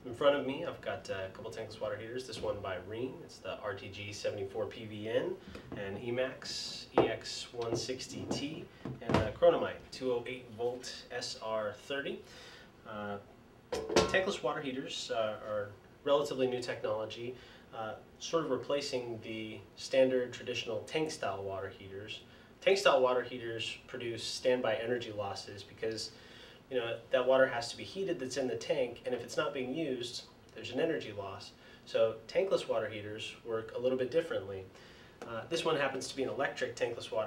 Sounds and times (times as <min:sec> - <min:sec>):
Speech: 0:00.0 - 0:12.3, 0:12.9 - 0:13.3, 0:14.0 - 0:37.2.